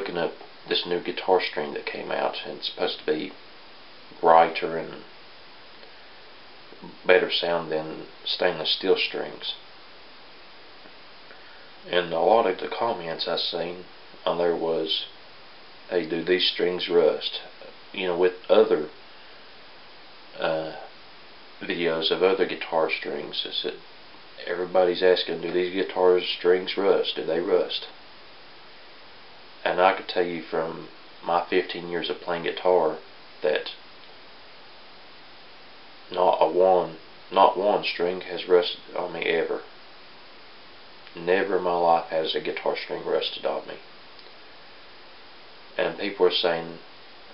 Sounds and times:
Speech: 0:00.0 - 0:03.4, 0:04.1 - 0:05.1, 0:06.7 - 0:09.6, 0:11.8 - 0:15.2, 0:15.9 - 0:19.0, 0:20.4 - 0:20.9, 0:21.6 - 0:28.0, 0:29.6 - 0:33.8, 0:36.1 - 0:39.8, 0:41.1 - 0:43.9, 0:45.8 - 0:46.9.

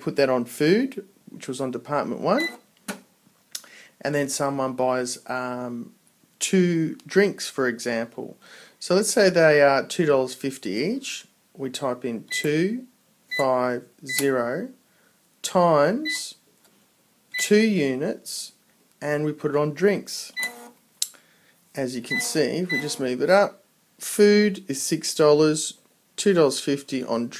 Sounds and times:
Speech: 0:00.0 - 0:02.5, 0:04.0 - 0:14.8, 0:15.4 - 0:16.4, 0:17.4 - 0:20.4, 0:21.8 - 0:27.3.

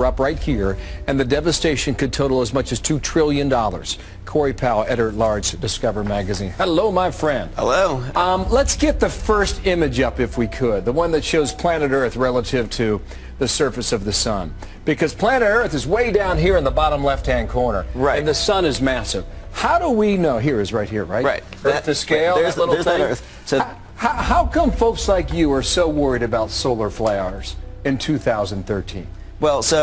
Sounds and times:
Speech: 0:00.0 - 0:29.8.

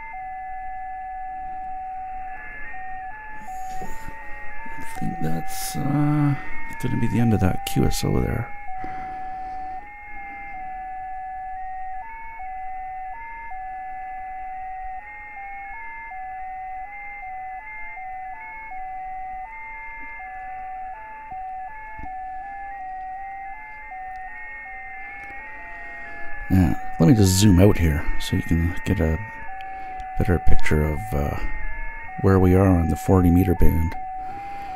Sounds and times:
Speech: 0:04.9 - 0:08.5, 0:26.5 - 0:29.3, 0:30.2 - 0:31.5, 0:32.2 - 0:34.0.

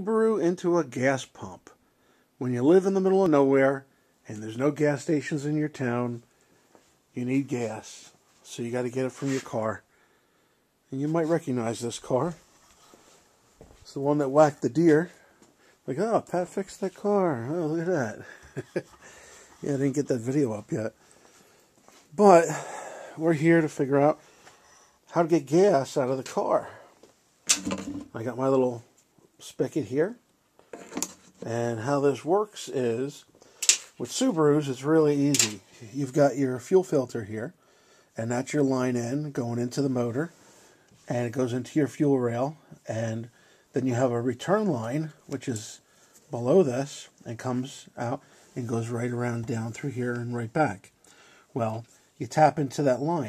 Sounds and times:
Speech: 0:00.0 - 0:01.8, 0:02.4 - 0:06.3, 0:07.1 - 0:09.9, 0:10.9 - 0:12.4, 0:13.8 - 0:18.9, 0:19.6 - 0:21.0, 0:22.1 - 0:24.2, 0:25.1 - 0:27.0, 0:27.6 - 0:30.3, 0:31.4 - 0:33.3, 0:33.9 - 0:37.6, 0:38.2 - 0:40.4, 0:41.0 - 0:53.2.

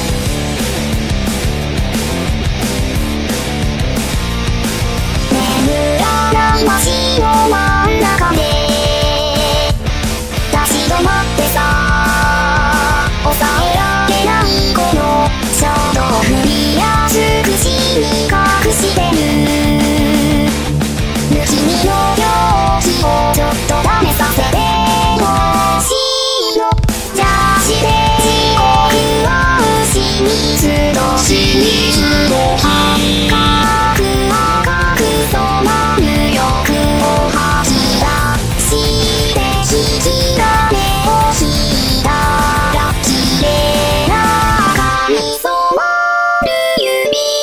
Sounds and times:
Music: 0:00.0 - 0:47.4.

